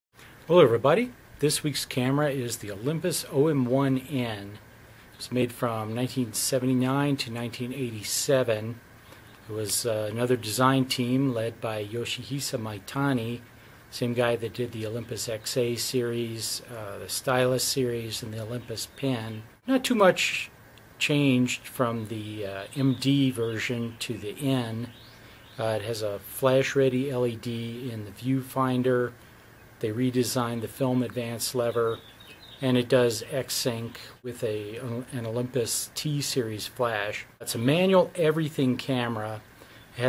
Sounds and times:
Speech: 0.5s - 4.6s, 5.2s - 8.8s, 9.4s - 25.0s, 25.6s - 29.2s, 29.8s - 32.0s, 32.6s - 40.0s.

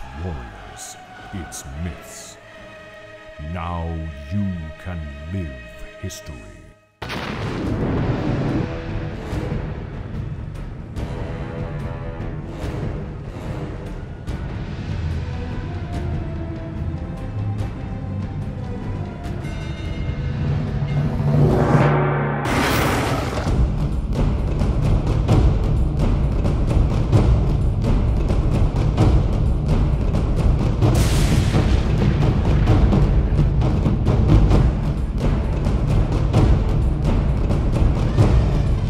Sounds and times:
Music: 0.0s - 38.8s.

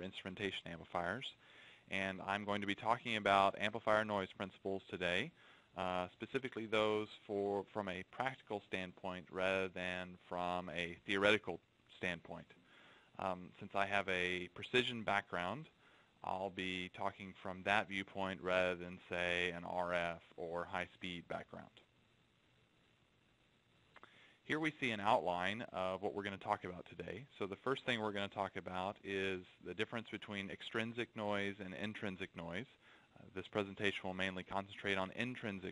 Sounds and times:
Speech: 0.0s - 12.6s, 13.2s - 21.9s, 24.5s - 35.7s.

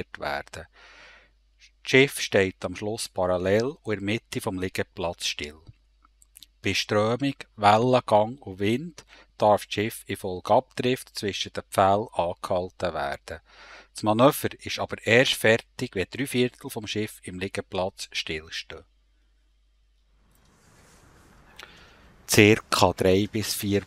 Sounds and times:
Speech: 0.0s - 0.7s, 1.6s - 5.7s, 6.5s - 18.8s, 22.3s - 23.8s.

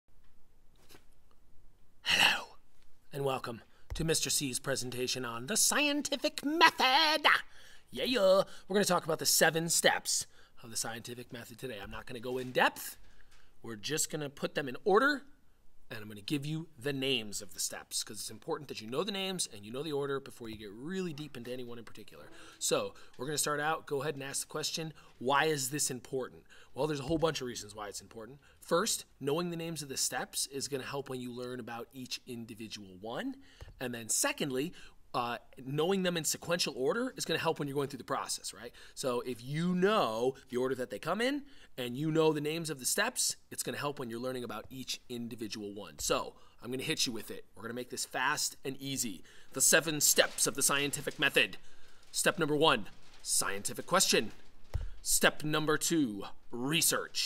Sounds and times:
Speech: 2.2s - 13.0s, 13.6s - 54.4s, 55.0s - 57.2s.

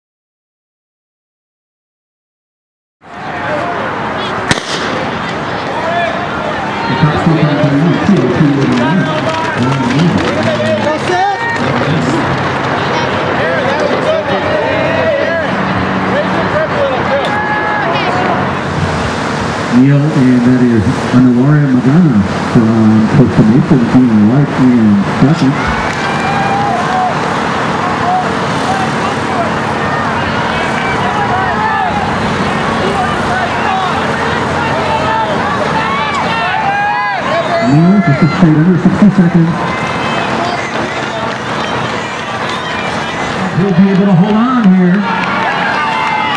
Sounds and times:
Run: 5.6s - 15.3s, 32.9s - 46.3s
Speech: 5.8s - 18.5s, 19.7s - 25.6s, 43.5s - 45.1s.

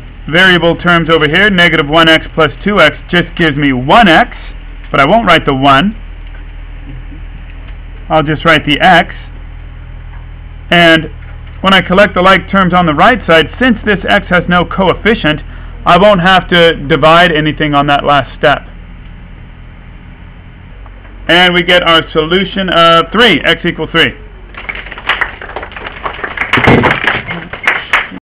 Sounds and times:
Speech: 0.3s - 6.0s, 8.1s - 9.3s, 10.7s - 18.7s, 21.3s - 24.2s.

